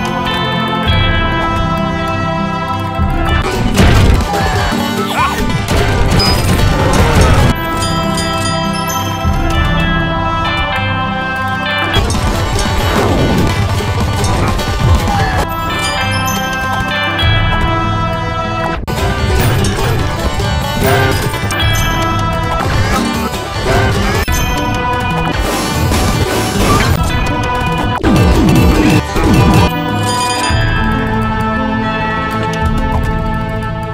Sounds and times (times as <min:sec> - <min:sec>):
Music: 0:00.0 - 0:33.9.